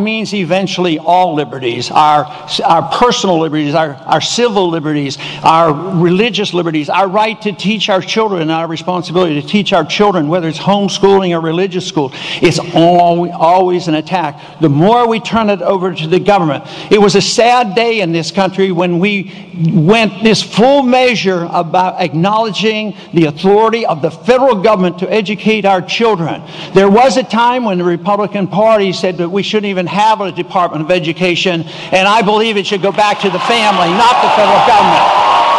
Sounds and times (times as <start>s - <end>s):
Male speech, man speaking: 0.0s - 35.1s
Narration, monologue: 0.0s - 35.5s.